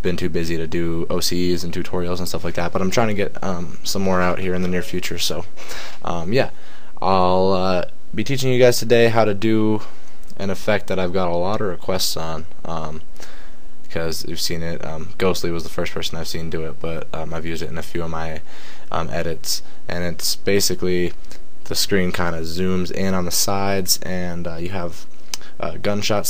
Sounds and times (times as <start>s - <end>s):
Speech: 0.0s - 13.1s, 13.9s - 26.2s.